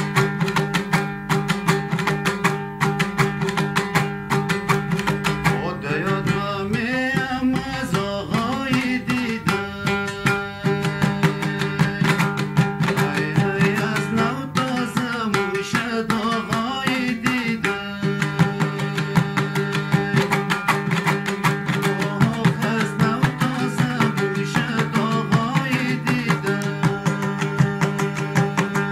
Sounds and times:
Folk music: 0.0 - 28.9.

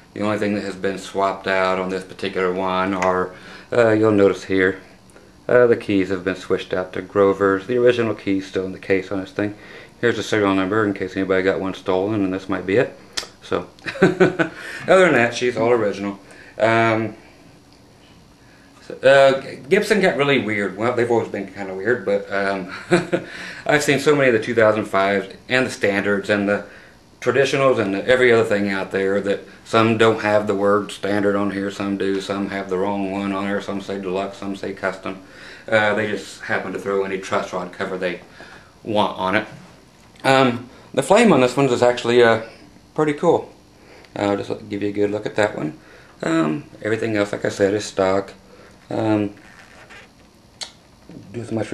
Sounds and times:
Speech: 0.1 - 4.9, 5.5 - 13.7, 14.9 - 17.2, 18.8 - 39.6, 40.2 - 49.4, 51.1 - 51.7.

